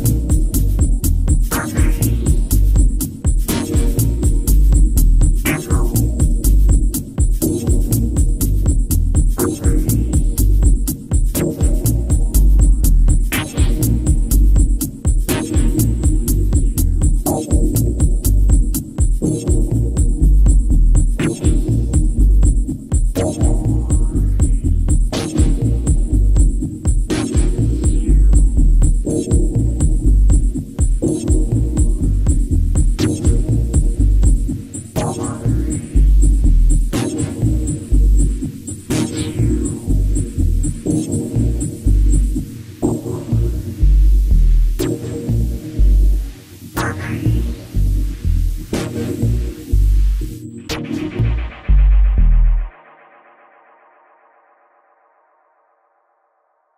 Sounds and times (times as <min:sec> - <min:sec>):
House music: 0:00.0 - 0:54.2.